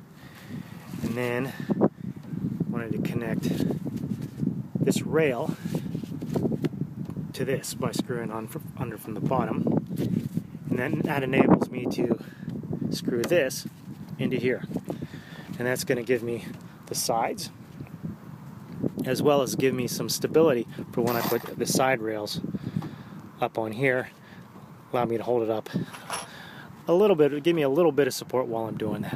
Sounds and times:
Speech: 1.0s - 1.6s, 2.7s - 3.6s, 4.9s - 5.6s, 7.4s - 9.7s, 10.7s - 12.2s, 13.0s - 14.7s, 15.6s - 17.6s, 19.0s - 22.4s, 23.4s - 24.2s, 24.9s - 25.7s, 26.9s - 29.1s.

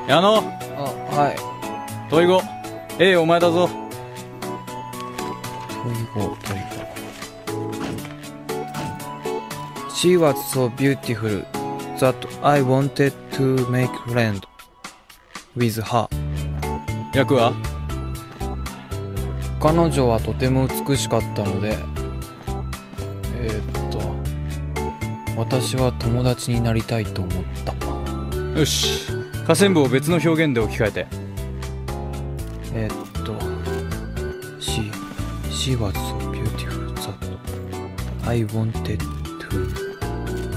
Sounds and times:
Music: 0.0s - 40.5s
Speech: 12.0s - 14.5s, 15.6s - 16.1s, 17.1s - 17.6s, 19.6s - 21.8s, 23.3s - 24.2s, 25.4s - 27.4s, 28.6s - 31.1s, 32.7s - 33.6s, 34.6s - 37.2s, 38.2s - 39.7s.

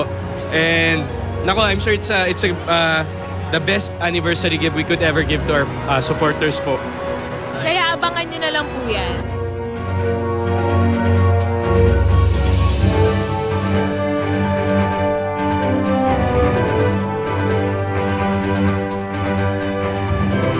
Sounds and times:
Theme music: 0.0s - 20.5s.

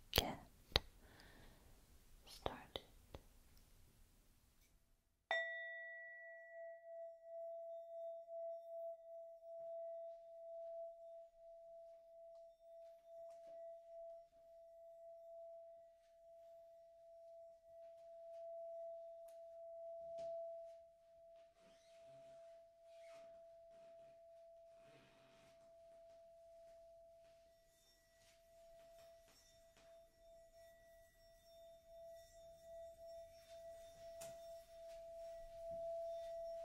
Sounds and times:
Whispering: 0.2s - 0.5s, 2.2s - 3.0s.

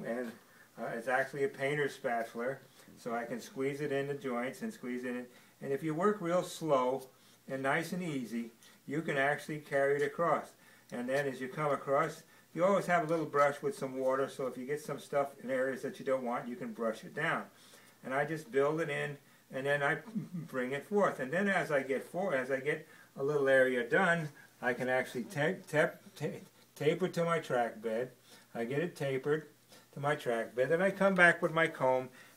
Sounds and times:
Speech: 0.0s - 32.2s.

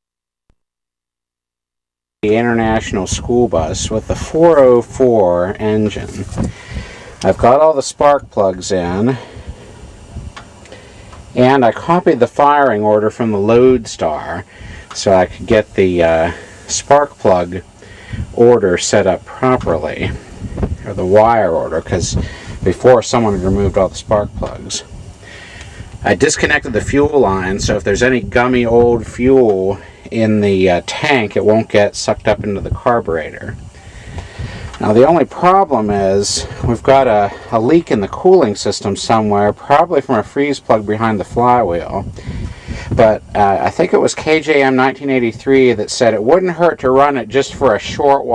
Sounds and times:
Speech: 2.2s - 6.5s, 7.2s - 9.3s, 11.4s - 17.7s, 18.3s - 20.2s, 20.8s - 24.9s, 26.0s - 33.6s, 34.8s - 42.2s, 42.9s - 48.3s.

